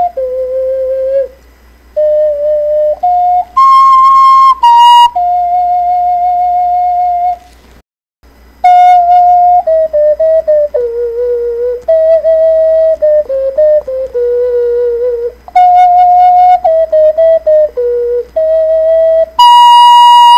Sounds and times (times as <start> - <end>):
Music: 2.0 - 7.4, 8.6 - 20.3.